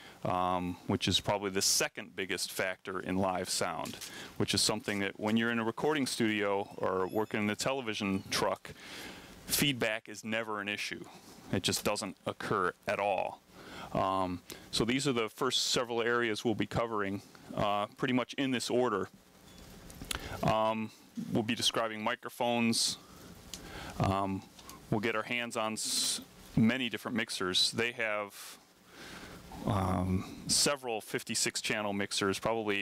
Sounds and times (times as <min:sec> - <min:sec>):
Speech: 0:00.2 - 0:08.7, 0:09.5 - 0:19.1, 0:20.4 - 0:23.0, 0:24.0 - 0:28.6, 0:29.6 - 0:32.8.